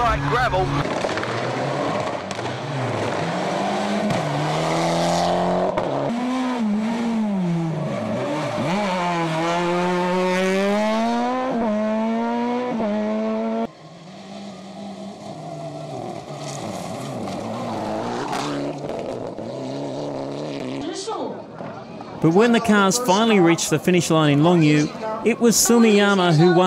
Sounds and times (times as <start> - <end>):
Race car, auto racing: 0.0 - 26.6.